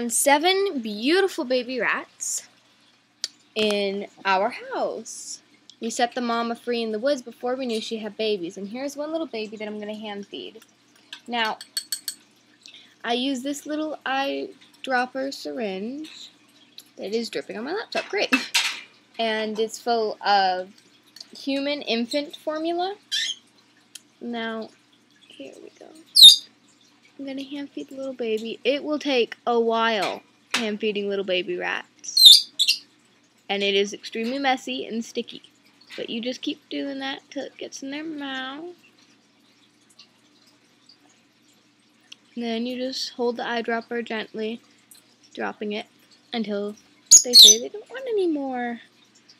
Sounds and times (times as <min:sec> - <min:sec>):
Speech: 0:00.0 - 0:02.5, 0:03.6 - 0:10.6, 0:11.3 - 0:11.6, 0:13.0 - 0:16.3, 0:17.0 - 0:18.5, 0:19.2 - 0:23.0, 0:24.2 - 0:24.7, 0:25.3 - 0:26.1, 0:27.2 - 0:32.2, 0:33.5 - 0:38.8, 0:42.4 - 0:44.6, 0:45.4 - 0:48.8.